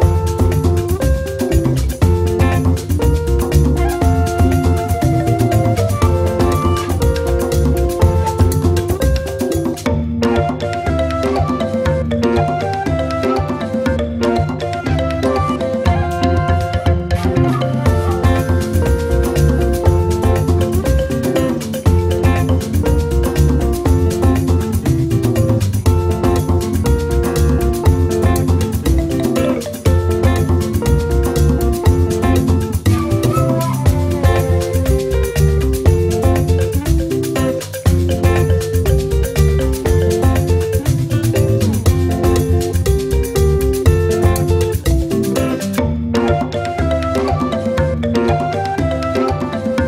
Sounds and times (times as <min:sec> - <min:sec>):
Music: 0:00.0 - 0:49.8.